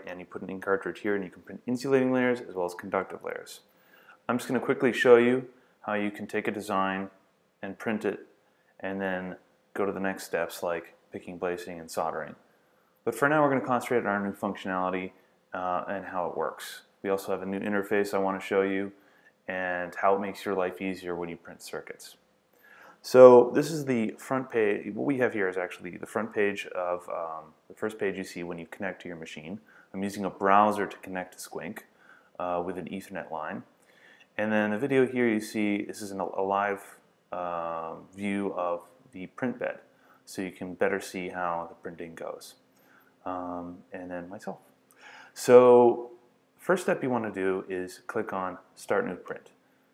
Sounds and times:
Speech: 0.0 - 22.2, 23.0 - 33.8, 34.4 - 42.6, 43.2 - 44.7, 45.4 - 49.6.

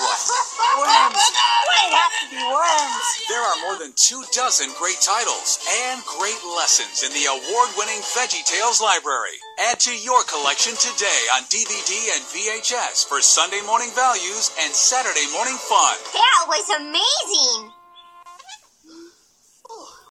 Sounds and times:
Speech: 0.8 - 17.7
Music: 2.1 - 18.4.

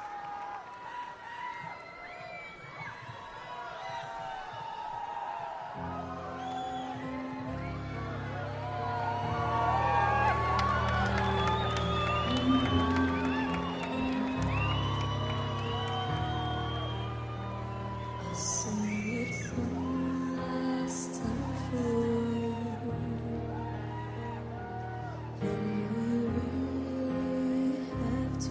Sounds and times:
Music: 5.2 - 28.5.

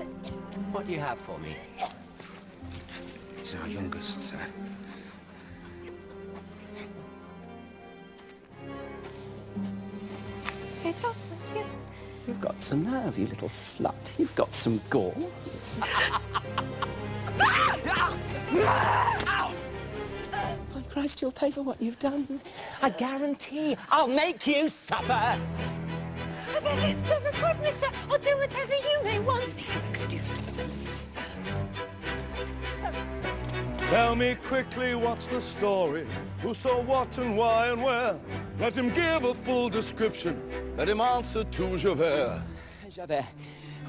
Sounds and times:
Music: 0.0 - 43.8.

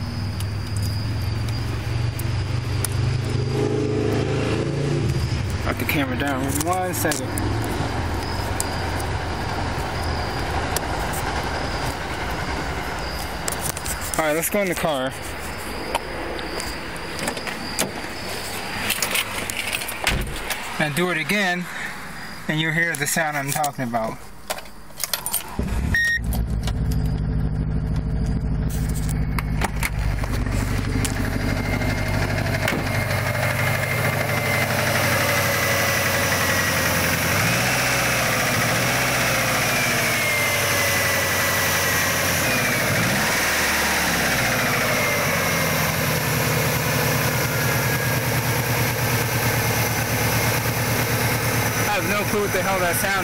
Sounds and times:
Car: 0.0 - 53.2
Engine: 0.0 - 53.2
Speech: 5.7 - 7.4, 14.2 - 15.2, 20.8 - 21.7, 22.5 - 24.2, 51.8 - 53.2.

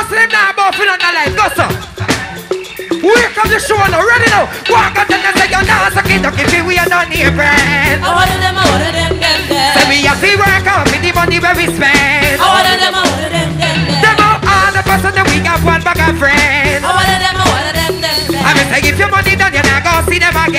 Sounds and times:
Music: 0.0 - 20.5.

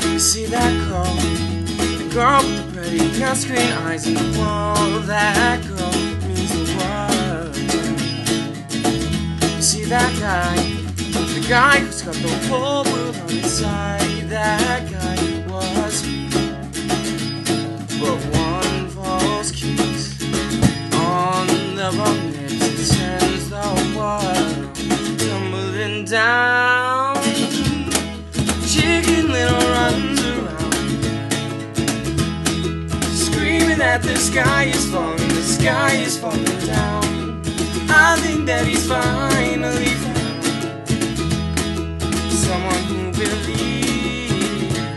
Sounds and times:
Music: 0.0 - 44.9.

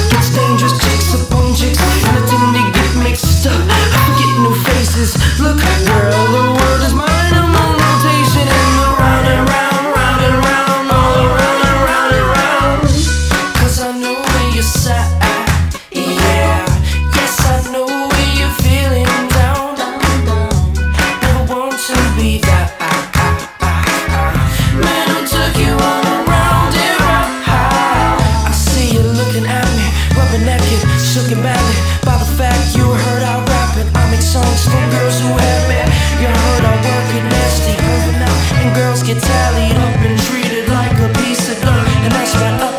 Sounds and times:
Music: 0.0 - 42.7.

